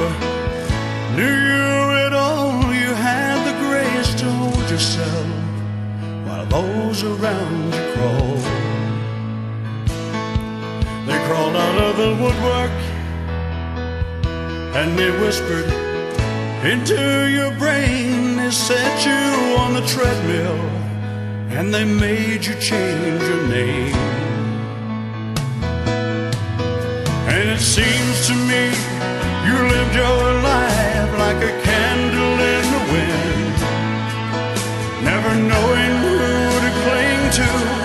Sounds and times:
Music: 0:00.0 - 0:37.8.

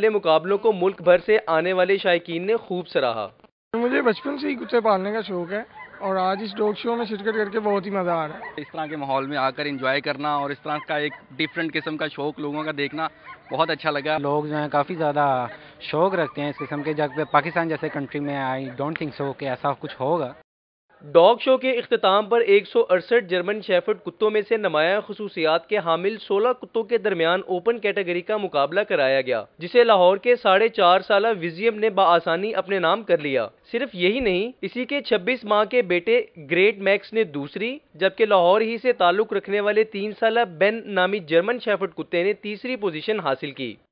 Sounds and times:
Speech: 0:00.0 - 0:20.4, 0:21.0 - 0:43.8.

